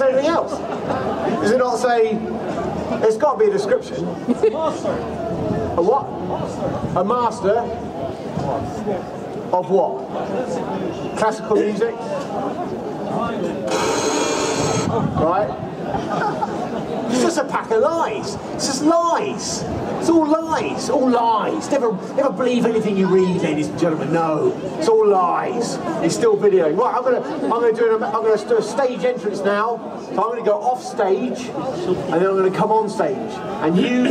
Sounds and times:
Speech: 0.0 - 0.6, 17.1 - 34.1.

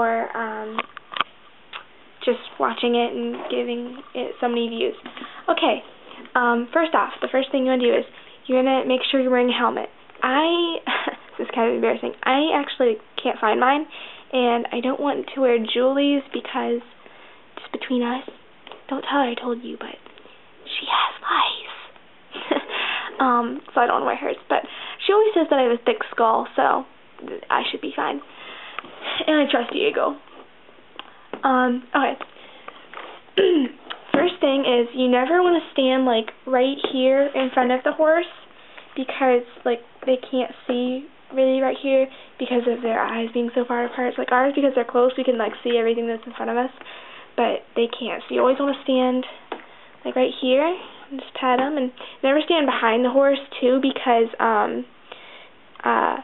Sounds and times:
Speech: 0.0 - 0.9, 2.2 - 16.9, 17.6 - 20.1, 20.7 - 21.9, 23.1 - 28.3, 29.0 - 30.2, 31.4 - 32.2, 33.4 - 38.4, 39.0 - 46.8, 47.4 - 49.4, 50.0 - 54.9, 55.8 - 56.2
Inside, small room: 0.0 - 56.2.

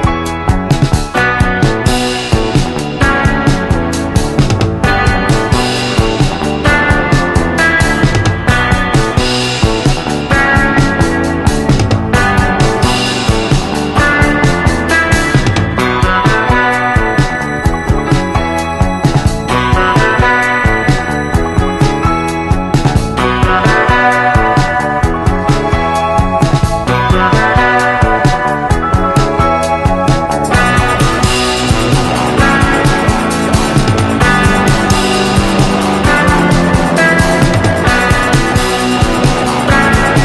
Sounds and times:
Music: 0.0 - 40.2.

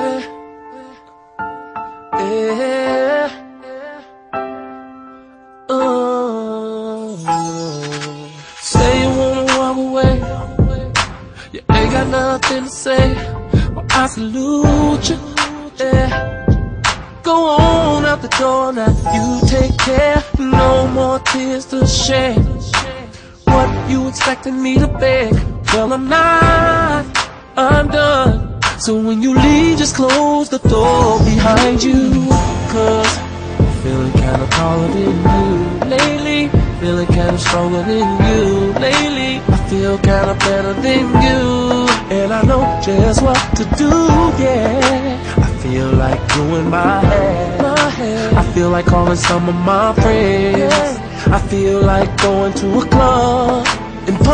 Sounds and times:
Independent music: 0.0 - 54.3
Rhythm and blues: 5.7 - 54.3.

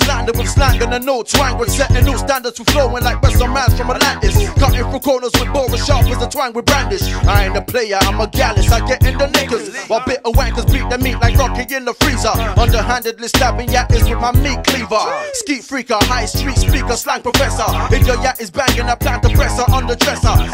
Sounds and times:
Hip hop music: 0.0 - 20.5
Rapping: 0.0 - 20.5.

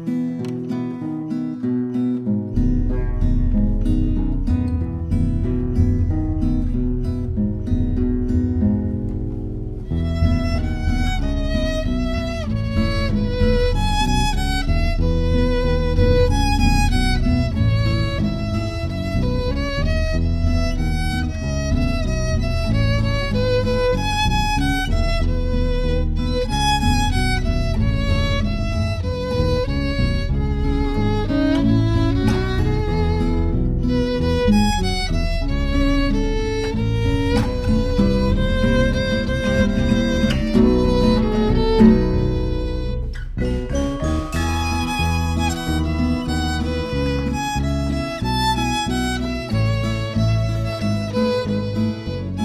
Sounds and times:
Violin, fiddle: 9.8 - 52.4.

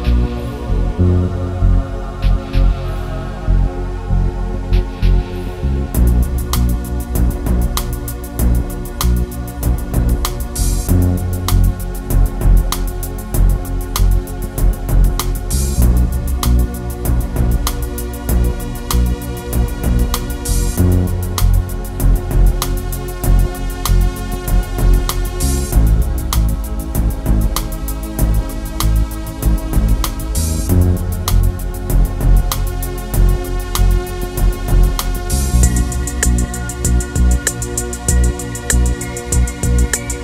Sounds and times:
Rhythm and blues: 0.0 - 40.2
Soundtrack music: 0.0 - 40.2.

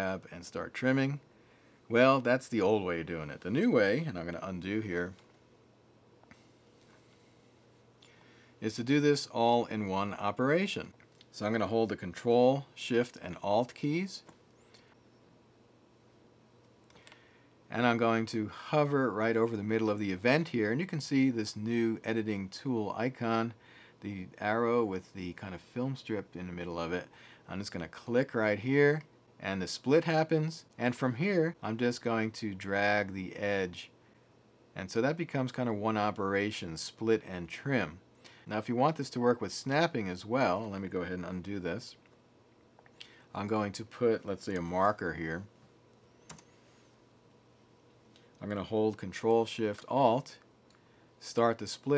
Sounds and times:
Speech: 0.0 - 1.2, 1.9 - 5.2, 8.6 - 14.3, 17.7 - 34.0, 34.8 - 42.0, 43.3 - 45.5, 48.4 - 50.5, 51.2 - 51.9.

